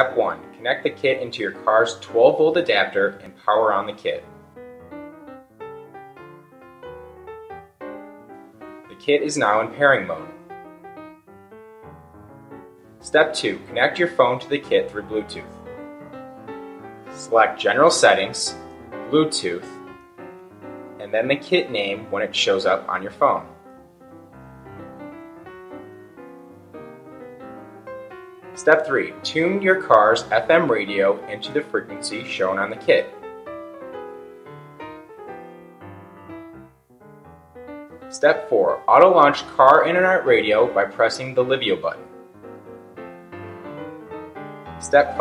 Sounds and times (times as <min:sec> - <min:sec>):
Speech: 0:00.0 - 0:04.3, 0:09.0 - 0:10.3, 0:13.0 - 0:15.5, 0:17.2 - 0:19.8, 0:21.0 - 0:23.6, 0:28.6 - 0:33.2, 0:38.1 - 0:42.0, 0:44.8 - 0:45.2
Music: 0:00.0 - 0:45.2.